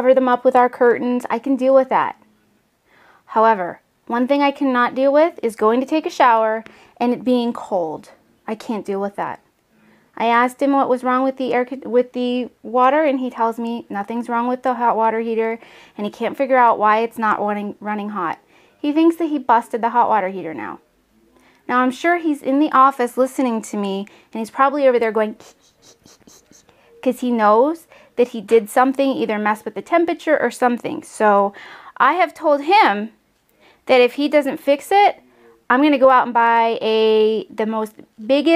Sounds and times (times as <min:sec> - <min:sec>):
Speech: 0:00.0 - 0:02.6, 0:03.3 - 0:09.5, 0:10.2 - 0:33.2, 0:33.9 - 0:38.5
Inside, small room: 0:00.0 - 0:38.5.